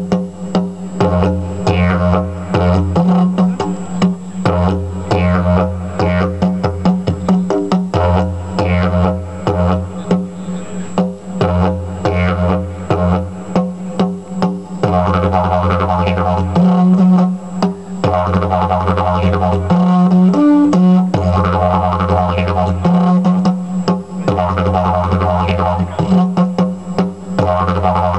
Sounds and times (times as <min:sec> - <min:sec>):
Didgeridoo: 0:00.0 - 0:28.1.